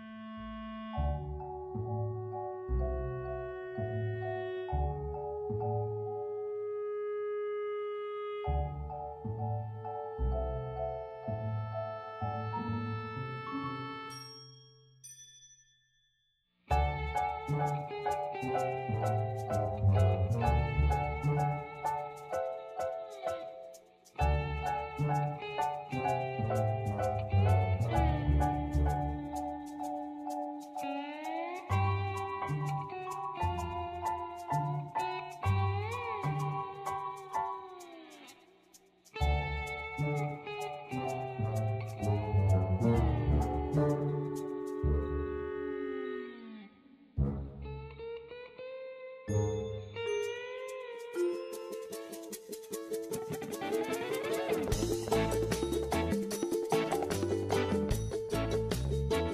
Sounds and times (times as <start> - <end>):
Music: 0.0 - 15.2, 16.7 - 59.3.